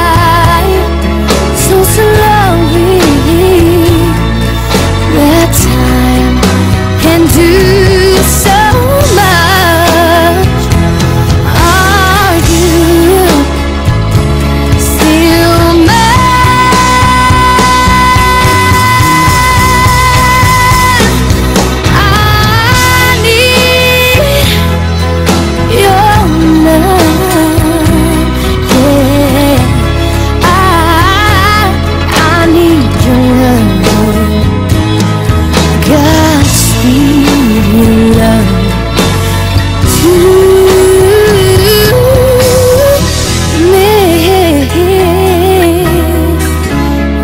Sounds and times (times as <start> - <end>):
Music: 0.0 - 47.2.